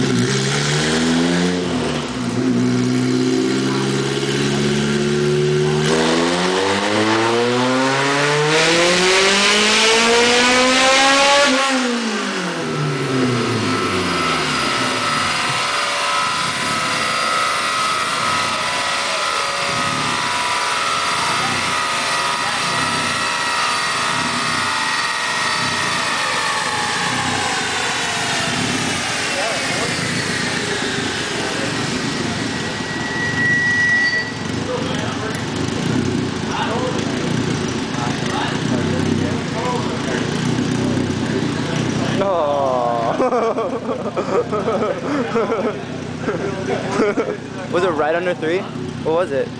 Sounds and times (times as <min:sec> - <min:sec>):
Speech: 0:34.6 - 0:35.5, 0:36.5 - 0:40.4, 0:45.7 - 0:49.5.